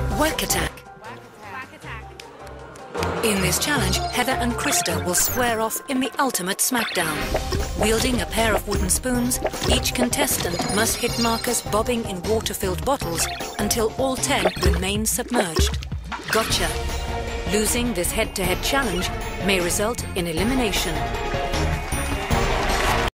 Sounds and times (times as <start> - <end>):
Music: 0.0 - 23.1
Speech: 3.2 - 7.2, 7.8 - 15.7, 16.3 - 16.8, 17.5 - 21.0.